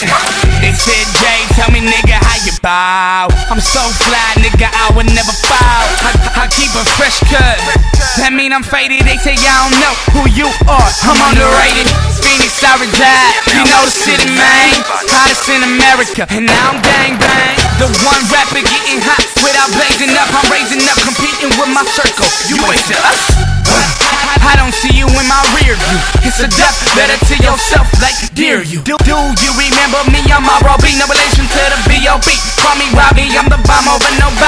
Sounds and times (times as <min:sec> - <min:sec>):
Rhythm and blues: 0:00.0 - 0:34.4.